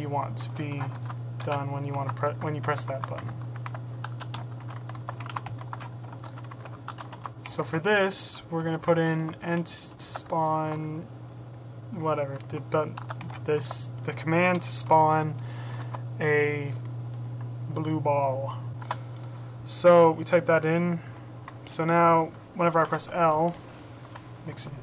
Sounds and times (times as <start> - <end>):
Speech: 0.0 - 3.3, 7.5 - 11.1, 11.9 - 15.4, 16.2 - 16.8, 17.7 - 18.6, 19.7 - 21.0, 21.7 - 23.6, 24.5 - 24.8
Computer keyboard: 0.4 - 7.4, 12.4 - 13.4.